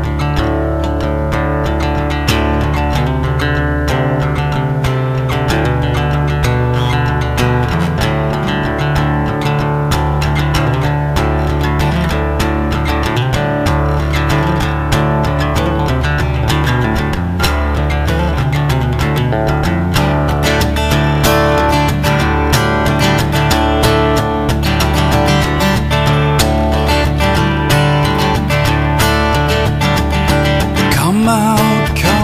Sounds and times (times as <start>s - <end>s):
Music: 0.0s - 32.2s.